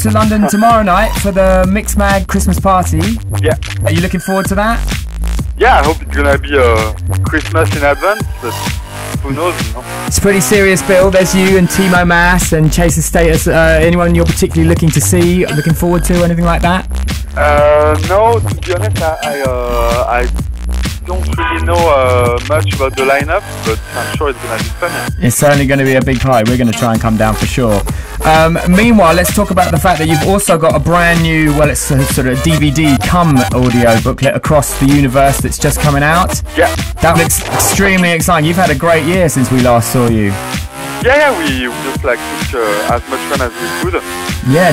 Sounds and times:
Speech: 0.0s - 4.8s, 5.6s - 8.6s, 9.2s - 16.8s, 17.4s - 20.3s, 21.1s - 40.4s, 41.0s - 44.7s
Music: 0.0s - 44.7s.

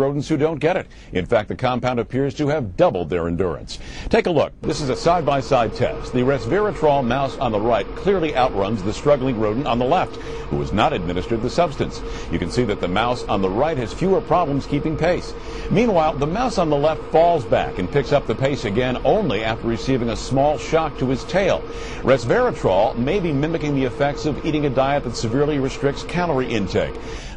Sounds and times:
Speech: 0.0s - 27.0s.

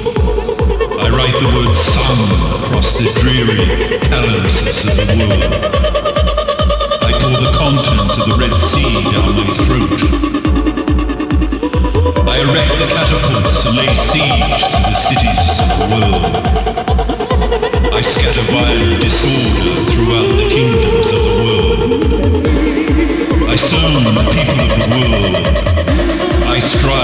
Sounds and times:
Speech: 0.0s - 6.0s, 6.9s - 10.2s, 11.6s - 16.6s, 17.8s - 27.0s
Music: 0.0s - 27.0s.

